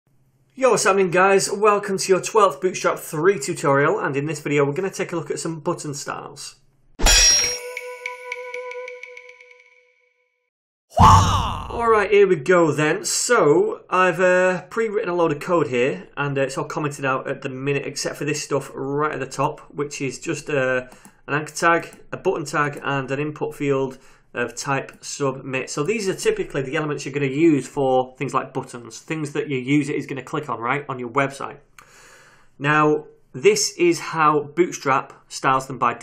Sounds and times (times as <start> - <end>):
Speech: 0.6 - 6.6, 11.0 - 31.6, 32.6 - 36.0
Music: 7.6 - 9.9.